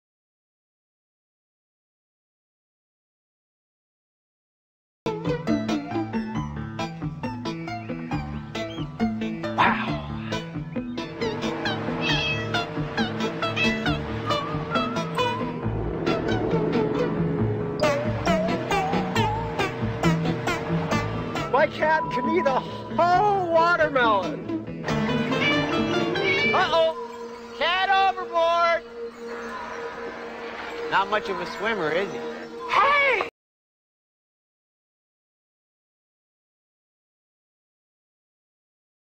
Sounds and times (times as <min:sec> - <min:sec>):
Speech: 0:21.5 - 0:24.4, 0:30.9 - 0:33.3.